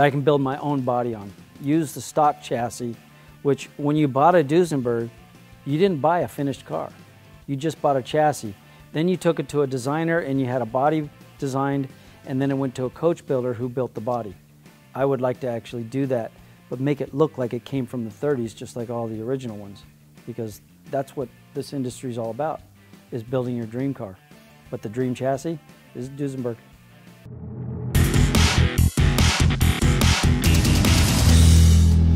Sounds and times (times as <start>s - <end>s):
Speech: 0.0s - 5.1s, 5.7s - 14.4s, 15.0s - 26.6s
Music: 0.0s - 32.1s.